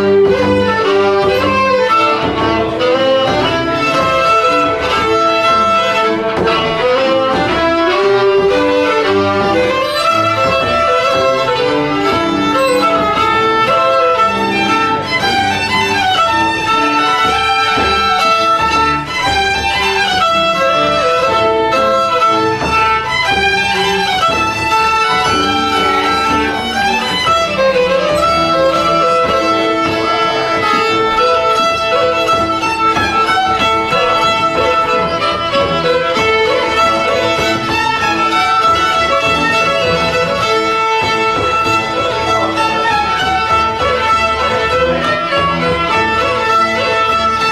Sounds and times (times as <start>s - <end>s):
Violin, fiddle: 0.0s - 47.5s.